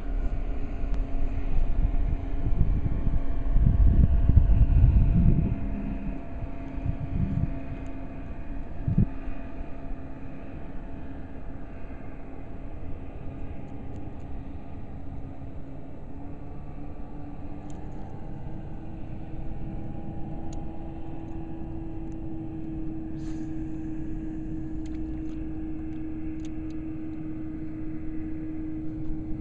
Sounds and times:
Outside, rural or natural: 0.0 - 29.4.

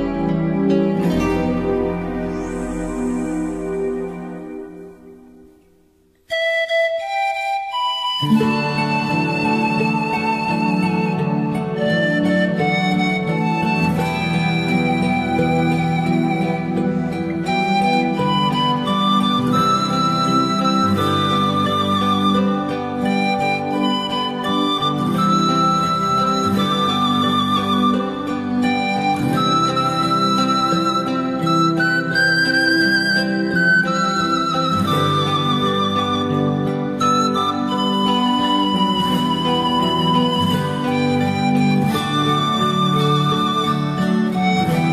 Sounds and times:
Music: 0.0 - 44.9.

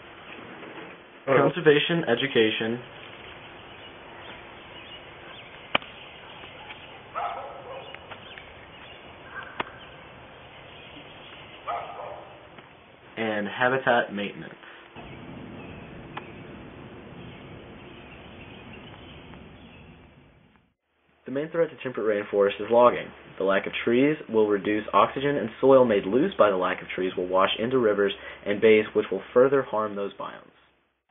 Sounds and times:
Outside, rural or natural: 0.0 - 31.1
Speech: 1.3 - 2.9, 13.2 - 14.6, 21.3 - 30.6.

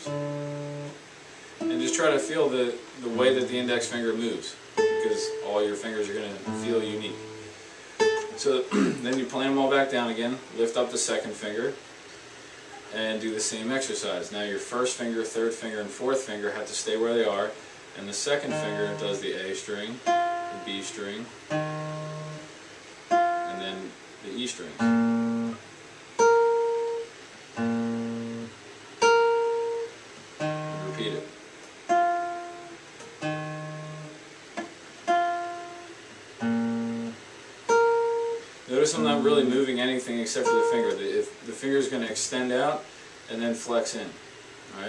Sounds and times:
Acoustic guitar: 0.0 - 13.8, 15.3 - 41.2
Speech: 1.7 - 7.2, 8.3 - 11.8, 12.7 - 20.0, 20.6 - 21.4, 23.5 - 24.8, 30.8 - 31.3, 38.7 - 44.8.

